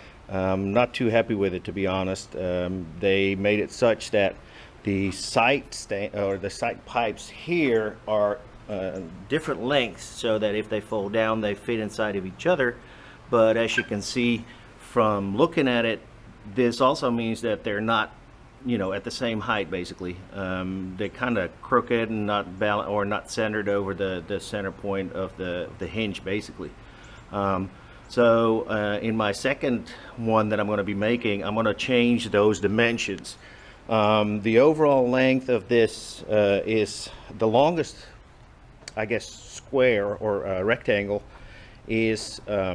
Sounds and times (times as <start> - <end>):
Speech: 0.3 - 38.2, 38.9 - 41.3, 41.9 - 42.7.